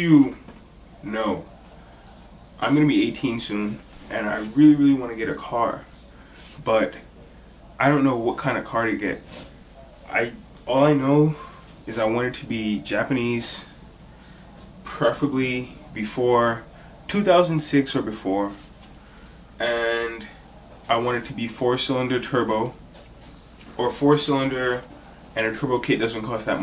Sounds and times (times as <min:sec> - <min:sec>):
Speech: 0:00.0 - 0:01.5, 0:02.6 - 0:06.0, 0:06.6 - 0:07.1, 0:07.7 - 0:09.4, 0:10.0 - 0:13.8, 0:14.6 - 0:18.8, 0:19.6 - 0:22.8, 0:23.6 - 0:26.6.